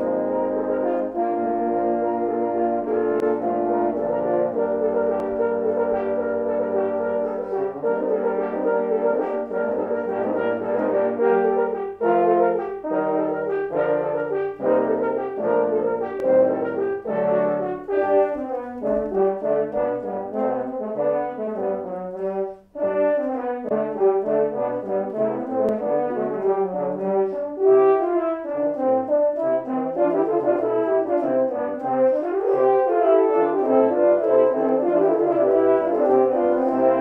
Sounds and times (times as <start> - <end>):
French horn: 0.0 - 37.0.